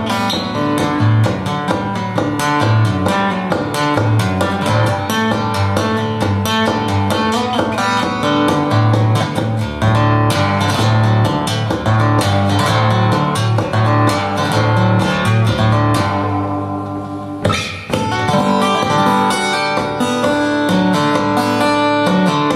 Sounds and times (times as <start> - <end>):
Acoustic guitar: 0.0 - 22.5.